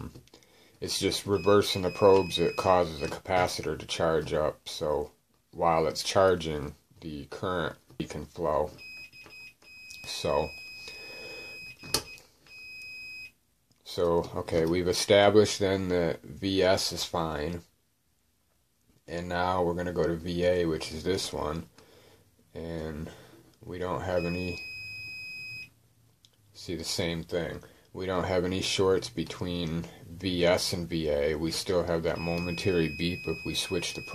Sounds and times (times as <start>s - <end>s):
Inside, small room: 0.0s - 34.1s
Speech: 0.8s - 8.8s, 10.0s - 10.6s, 13.8s - 17.7s, 19.1s - 21.7s, 22.5s - 24.6s, 26.6s - 34.1s.